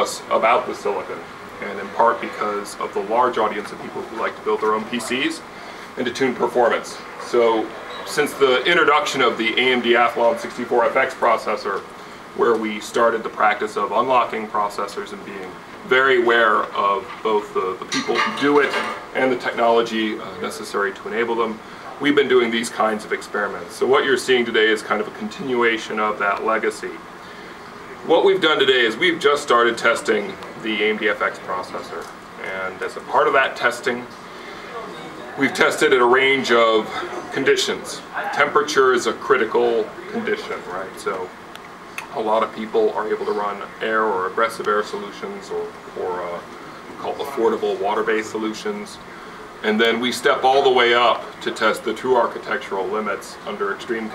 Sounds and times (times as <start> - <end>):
Speech: 0.0 - 27.1, 27.9 - 41.4, 42.0 - 54.1.